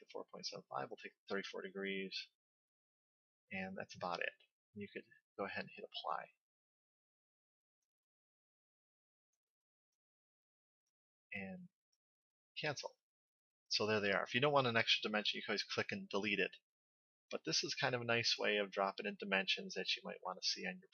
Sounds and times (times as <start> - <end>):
Speech: 0.0 - 2.4, 3.6 - 6.4, 11.4 - 11.7, 12.6 - 13.0, 13.7 - 16.6, 17.4 - 20.9
Inside, small room: 3.5 - 6.5, 17.3 - 20.9.